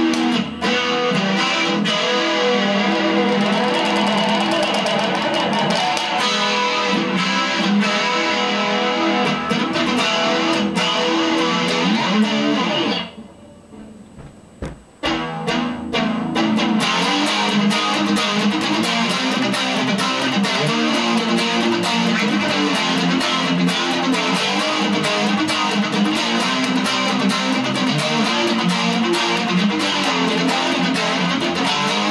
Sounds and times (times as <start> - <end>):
Electric guitar: 0.0 - 14.0, 15.0 - 32.1.